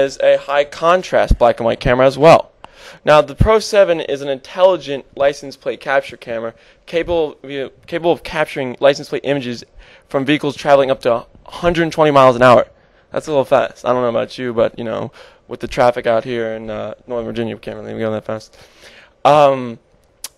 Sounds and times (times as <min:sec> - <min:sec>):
Speech: 0:00.0 - 0:18.6, 0:19.2 - 0:19.8.